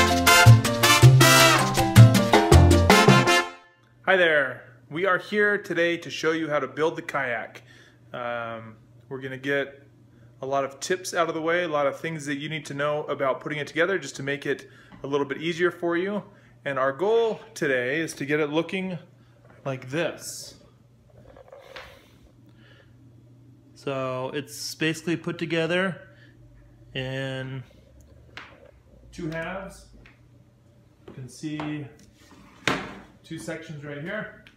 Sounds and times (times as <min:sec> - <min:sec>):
Speech: 0:04.1 - 0:07.6, 0:08.2 - 0:09.8, 0:10.4 - 0:20.6, 0:23.8 - 0:26.1, 0:27.0 - 0:27.7, 0:29.1 - 0:30.0, 0:31.1 - 0:32.0, 0:33.2 - 0:34.5.